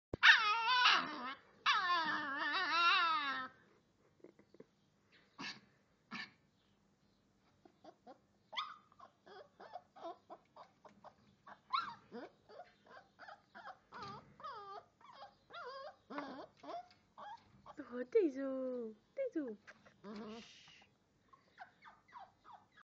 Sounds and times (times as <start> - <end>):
Whimper (dog): 0.2 - 3.6, 7.9 - 10.7, 11.5 - 17.8, 21.4 - 22.8
Speech: 17.8 - 19.7.